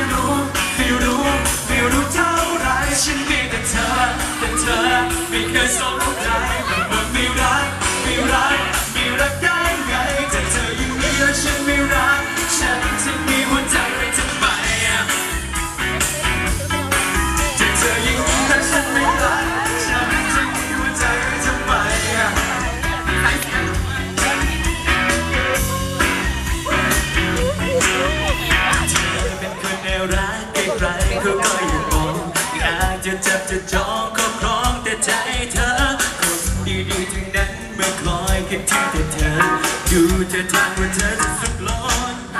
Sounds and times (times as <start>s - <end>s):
Music: 0.0s - 42.3s.